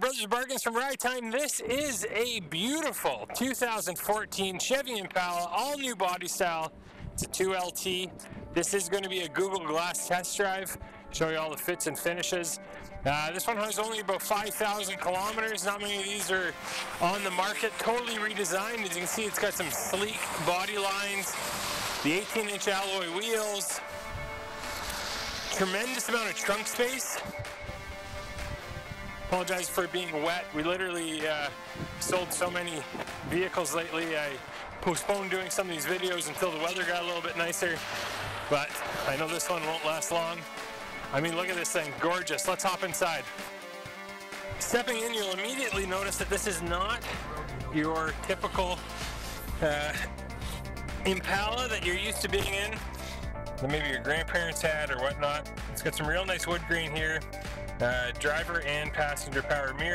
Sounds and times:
Speech: 0.0s - 21.4s, 22.0s - 23.8s, 25.5s - 27.2s, 29.3s - 37.8s, 38.5s - 40.4s, 41.1s - 43.3s, 44.6s - 48.8s, 49.6s - 50.1s, 51.0s - 52.8s, 53.6s - 57.2s, 57.8s - 59.9s
Music: 0.0s - 59.9s.

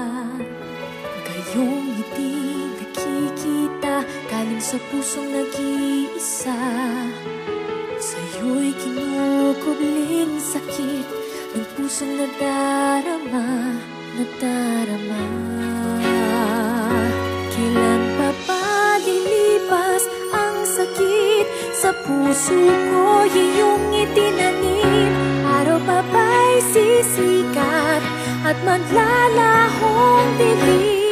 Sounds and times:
Music: 0.0s - 31.1s.

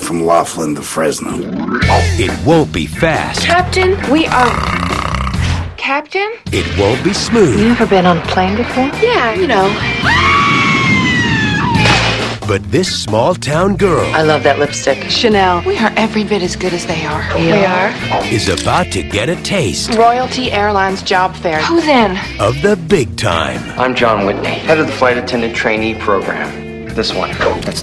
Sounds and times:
Music: 1.8s - 27.8s.

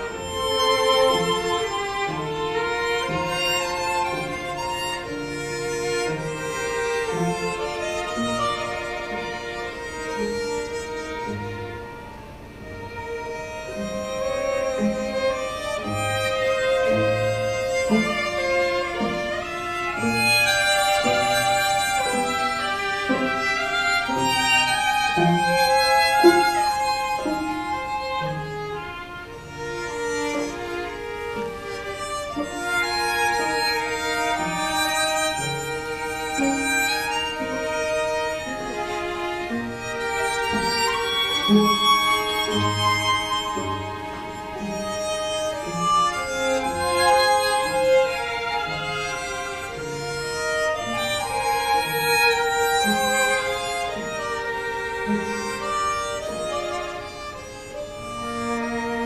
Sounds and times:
Cello: 0.0s - 59.0s
Orchestra: 0.0s - 59.0s
Violin, fiddle: 0.0s - 59.0s.

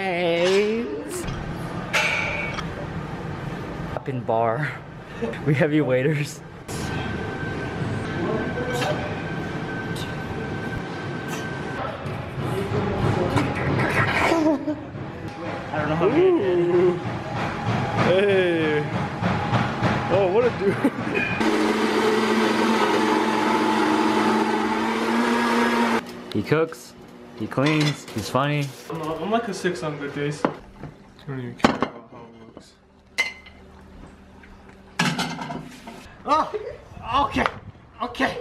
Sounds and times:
Blender: 21.4s - 26.0s.

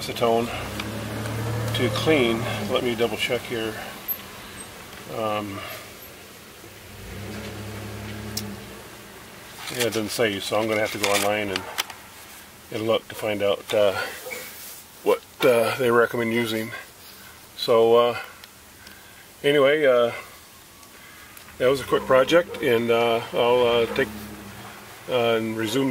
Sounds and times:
Speech: 0.0s - 0.7s, 1.8s - 3.8s, 5.1s - 5.7s, 9.7s - 11.7s, 12.7s - 14.1s, 15.0s - 16.9s, 17.6s - 18.3s, 19.4s - 20.3s, 21.6s - 24.2s, 25.1s - 25.9s
Outside, urban or manmade: 0.0s - 25.9s.

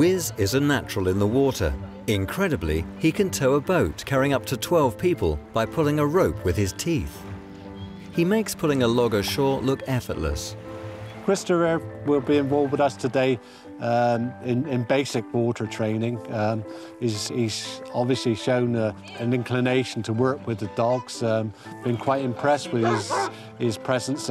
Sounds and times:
Music: 0.0s - 24.3s
Speech: 11.3s - 24.3s.

